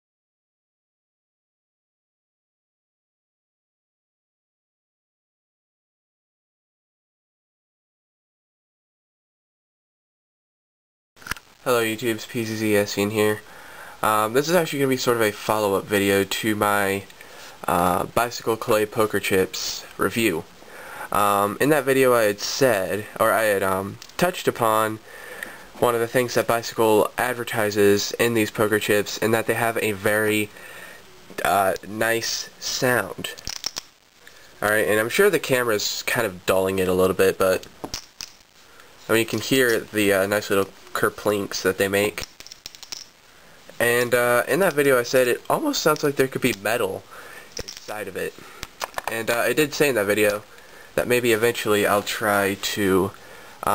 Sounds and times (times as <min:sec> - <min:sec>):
Speech: 0:11.6 - 0:20.5, 0:21.1 - 0:25.0, 0:25.8 - 0:30.6, 0:31.4 - 0:33.4, 0:34.6 - 0:37.7, 0:39.0 - 0:42.2, 0:43.8 - 0:47.1, 0:47.7 - 0:48.4, 0:49.0 - 0:53.7.